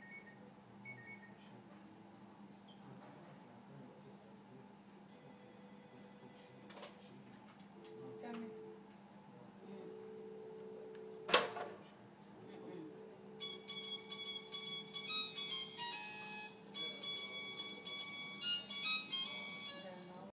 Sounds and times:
Music: 13.5 - 20.3.

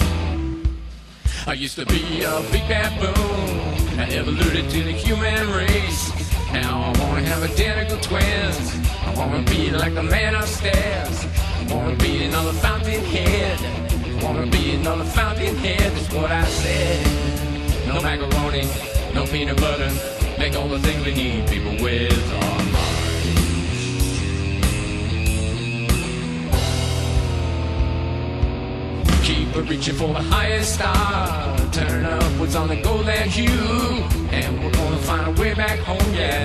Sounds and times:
Heavy metal: 0.0 - 36.4
Progressive rock: 0.0 - 36.4
Psychedelic rock: 0.0 - 36.4
Punk rock: 0.0 - 36.4.

